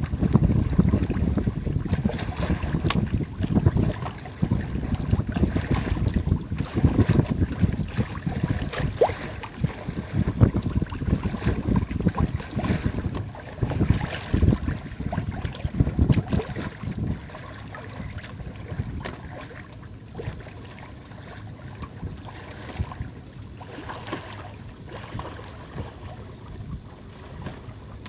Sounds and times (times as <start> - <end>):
Sailboat, sailing ship: 0.0 - 28.0
Wind noise (microphone): 0.0 - 28.0.